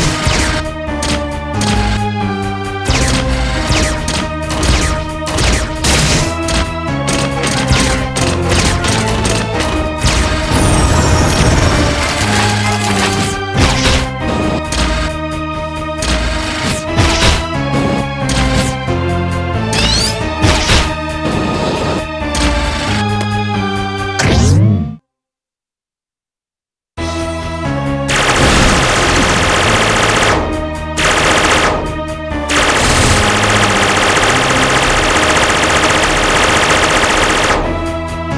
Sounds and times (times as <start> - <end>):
Music: 0.0 - 25.2, 27.0 - 38.3.